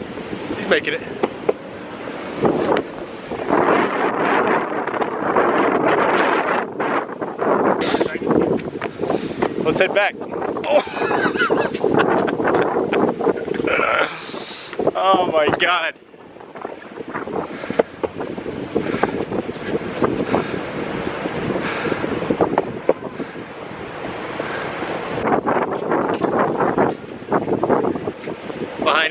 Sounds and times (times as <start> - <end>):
Wind noise (microphone): 0.0 - 29.1.